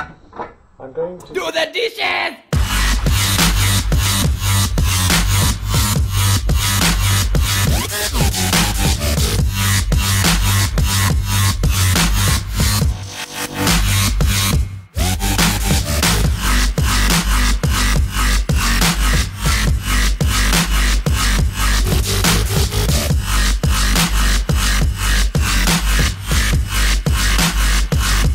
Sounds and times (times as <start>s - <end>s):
Dubstep: 1.3s - 28.3s.